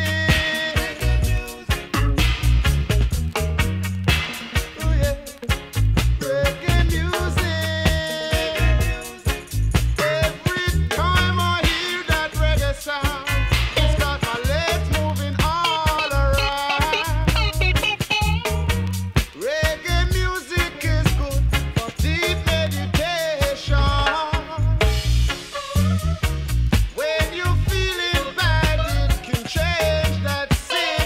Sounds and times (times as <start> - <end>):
Reggae: 0.0 - 31.0.